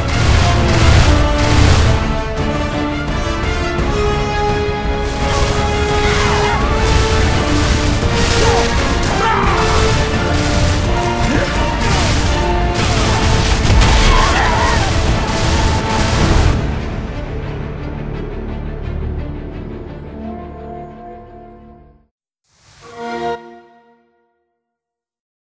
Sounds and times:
Music: 0.0s - 25.1s.

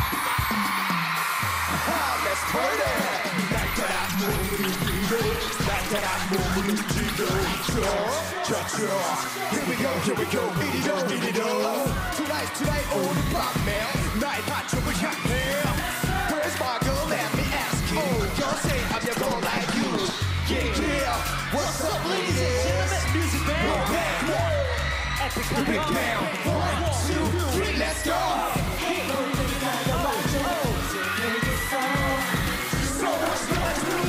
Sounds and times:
Music: 0.0s - 34.0s.

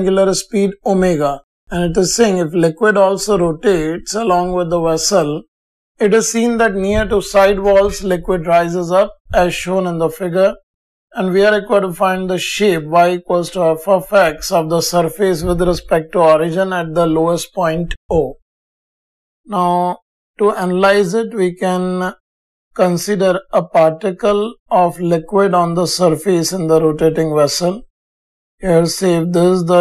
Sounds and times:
Speech: 0.0s - 10.6s, 11.2s - 18.4s, 19.5s - 22.2s, 22.8s - 27.9s, 28.6s - 29.8s.

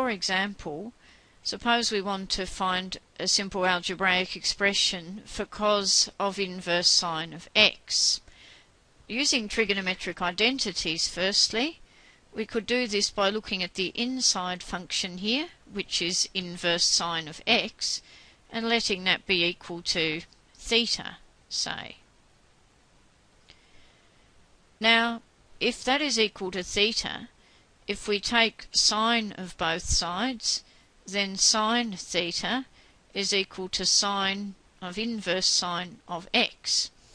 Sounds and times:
Speech: 0.0s - 8.3s, 9.1s - 11.8s, 12.4s - 22.0s, 24.8s - 27.3s, 27.9s - 36.9s.

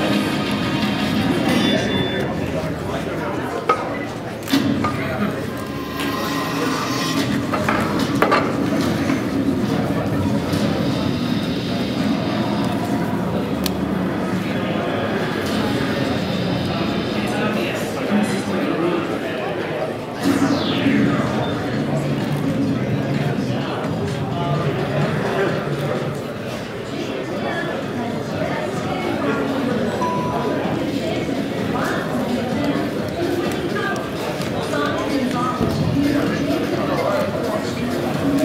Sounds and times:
Speech: 0.0s - 38.4s.

